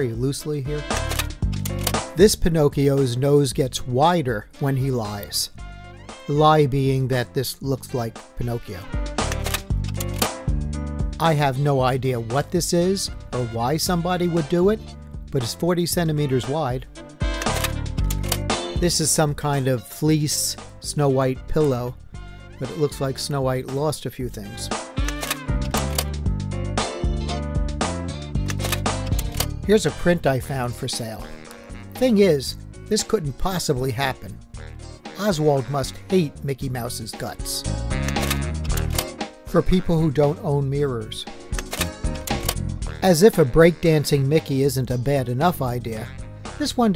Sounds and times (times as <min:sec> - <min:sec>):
Speech: 0:00.0 - 0:00.9, 0:02.2 - 0:05.6, 0:06.3 - 0:08.9, 0:11.2 - 0:16.9, 0:18.8 - 0:22.0, 0:22.6 - 0:24.8, 0:29.7 - 0:31.3, 0:32.0 - 0:34.4, 0:35.2 - 0:37.7, 0:39.5 - 0:41.3, 0:43.0 - 0:46.9
Music: 0:00.0 - 0:46.9.